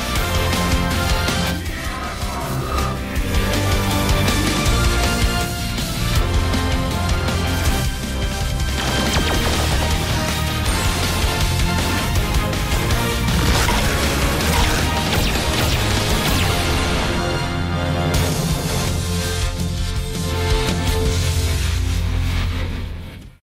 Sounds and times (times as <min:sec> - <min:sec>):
Music: 0:00.0 - 0:23.4.